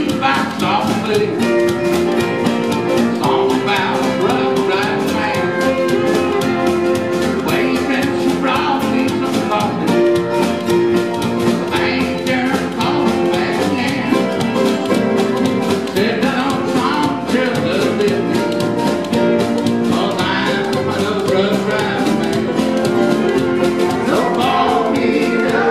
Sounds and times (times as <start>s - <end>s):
Music: 0.0s - 25.7s.